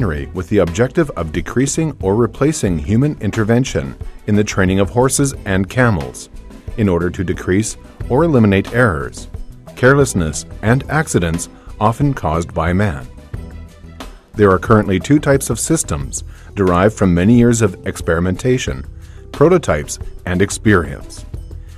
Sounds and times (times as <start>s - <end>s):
Speech: 0.0s - 13.1s, 14.4s - 21.3s
Music: 0.0s - 21.7s.